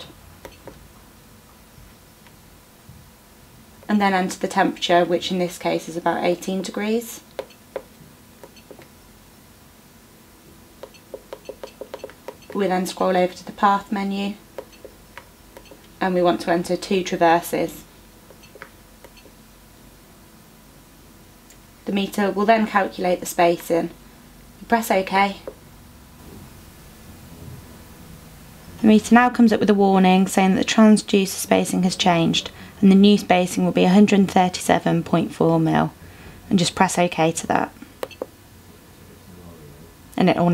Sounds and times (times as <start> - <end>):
Inside, small room: 0.0 - 40.5
Speech: 3.9 - 7.3, 12.6 - 14.4, 16.0 - 17.9, 21.8 - 24.0, 24.6 - 25.5, 28.8 - 37.8, 39.0 - 40.5.